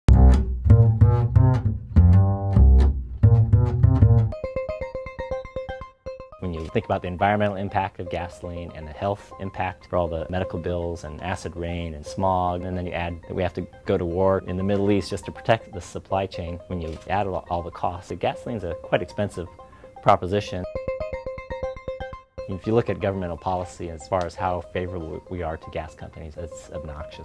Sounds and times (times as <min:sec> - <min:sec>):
Music: 0:00.1 - 0:27.2
Speech: 0:06.4 - 0:20.7, 0:22.5 - 0:27.2.